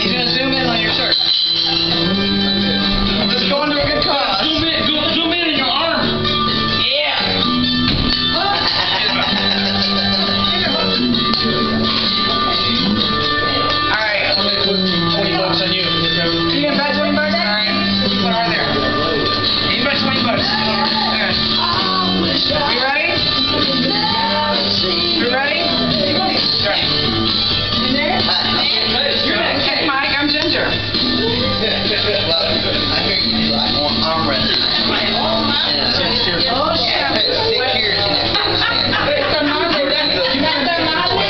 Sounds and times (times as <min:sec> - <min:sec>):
Music: 0:00.0 - 0:41.2.